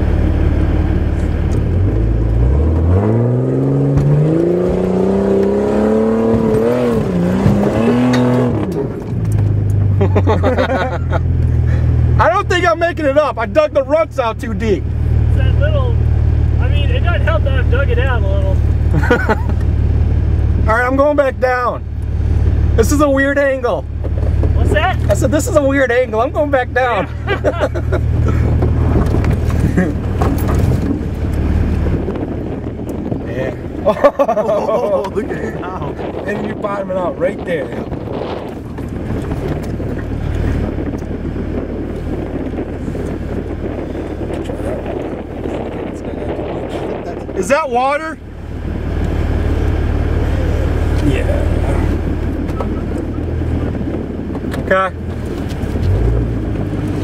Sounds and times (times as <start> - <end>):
Speech: 12.2 - 14.8, 16.6 - 18.6, 20.7 - 21.8, 24.6 - 27.1, 33.3 - 33.6, 34.6 - 37.9, 45.9 - 48.2, 50.3 - 51.9.